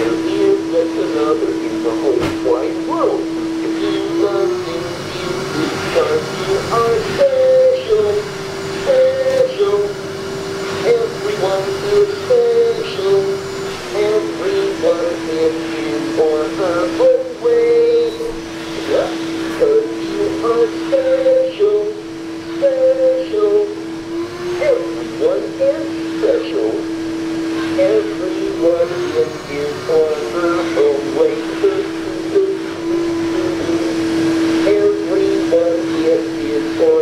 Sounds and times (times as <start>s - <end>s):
Speech: 0.0s - 8.3s, 8.9s - 10.0s, 10.8s - 13.3s, 13.9s - 22.0s, 22.6s - 23.7s, 24.6s - 26.8s, 27.8s - 32.7s, 33.3s - 33.9s, 34.6s - 37.0s
Male singing: 0.0s - 10.0s, 10.8s - 23.8s, 24.5s - 26.8s, 27.7s - 34.0s, 34.6s - 37.0s
Synthetic singing: 0.0s - 10.0s, 10.8s - 23.8s, 24.5s - 26.8s, 27.8s - 33.9s, 34.6s - 37.0s.